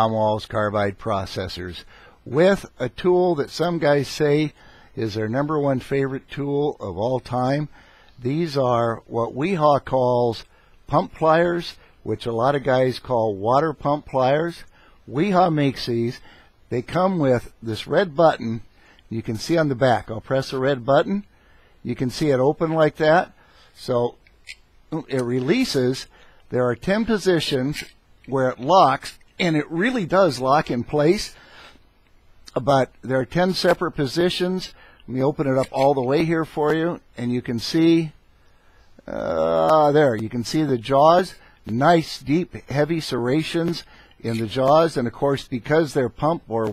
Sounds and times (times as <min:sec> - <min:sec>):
Speech: 0:00.0 - 0:24.2, 0:24.9 - 0:31.4, 0:32.5 - 0:38.2, 0:39.0 - 0:46.7.